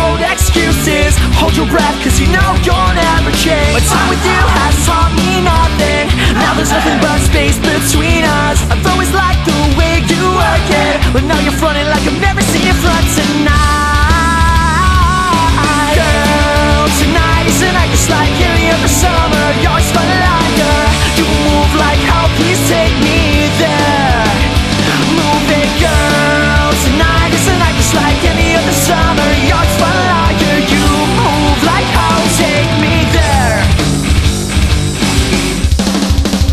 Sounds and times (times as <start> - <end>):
Music: 0.0 - 36.5.